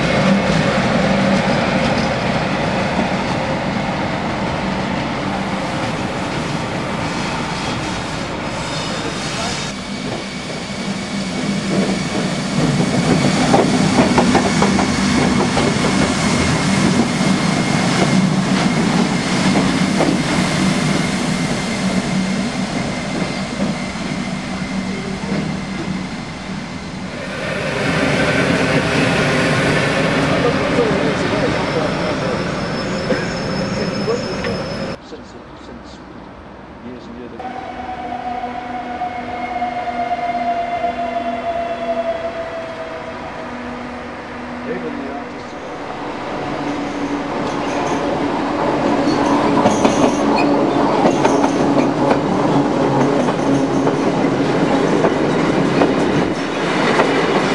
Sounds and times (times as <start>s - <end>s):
Railroad car, train wagon: 0.0s - 36.8s, 37.4s - 57.5s
Train: 0.0s - 57.5s
Train wheels squealing: 7.0s - 13.6s, 30.7s - 35.0s, 46.7s - 48.1s, 49.0s - 51.9s.